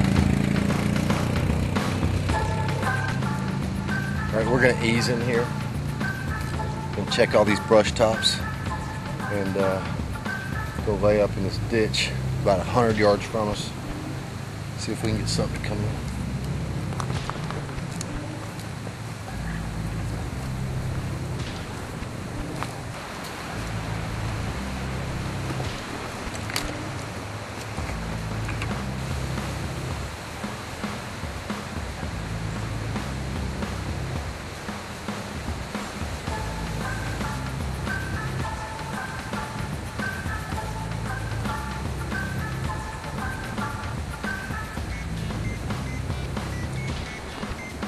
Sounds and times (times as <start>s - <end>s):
Music: 0.0s - 47.8s
Speech: 4.3s - 5.5s, 7.0s - 8.5s, 9.2s - 9.9s, 10.8s - 13.8s, 14.8s - 16.0s.